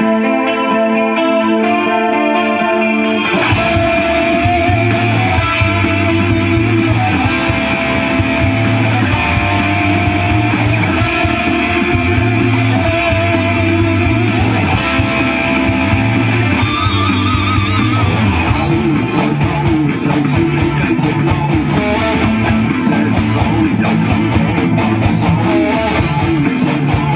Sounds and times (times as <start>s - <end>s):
Bass guitar: 0.0s - 27.1s
Electric guitar: 0.0s - 27.1s
Strum: 2.6s - 27.1s.